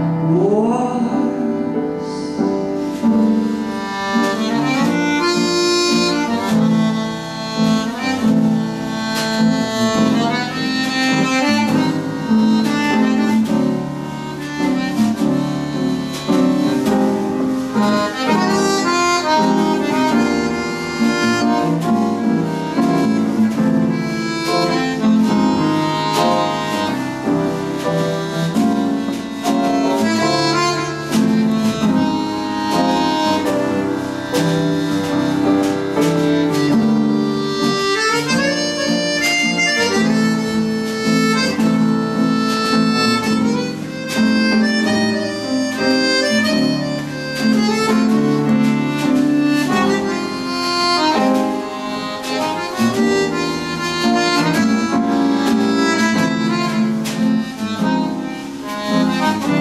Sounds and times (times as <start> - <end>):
Accordion: 0.0 - 59.6.